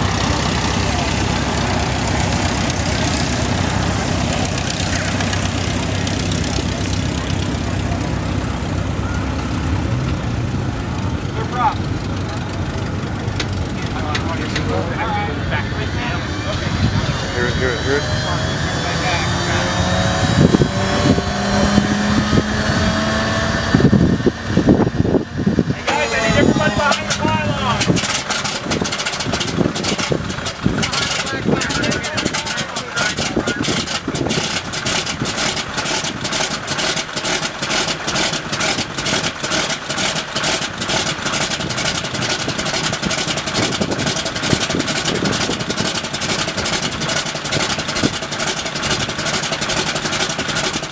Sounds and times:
Heavy engine (low frequency): 0.0s - 50.9s
Vehicle: 0.0s - 50.9s
Speech: 13.8s - 19.8s, 25.7s - 28.0s, 30.8s - 33.9s.

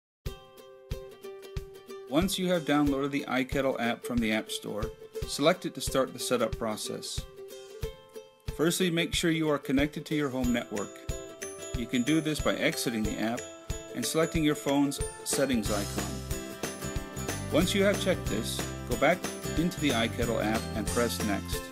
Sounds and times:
Speech: 2.1s - 7.2s, 8.6s - 11.0s, 11.8s - 13.4s, 14.0s - 16.2s, 17.5s - 21.7s.

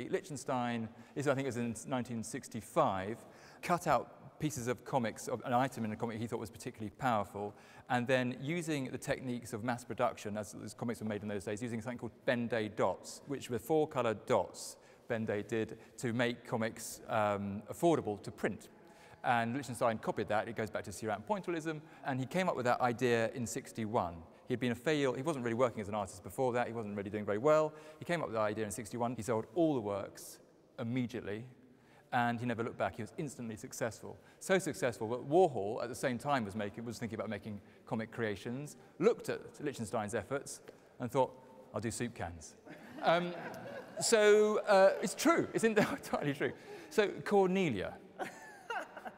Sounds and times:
Speech: 0.0s - 48.0s.

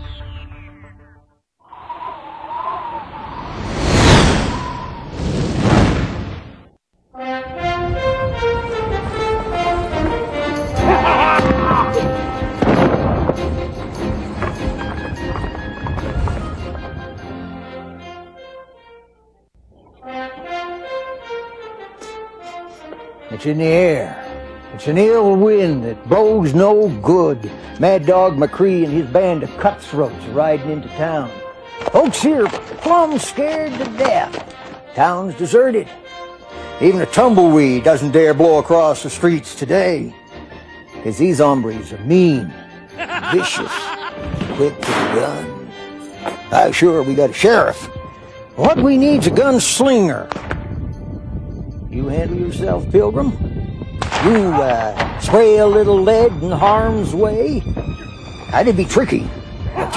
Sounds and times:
Music: 7.1s - 59.9s.

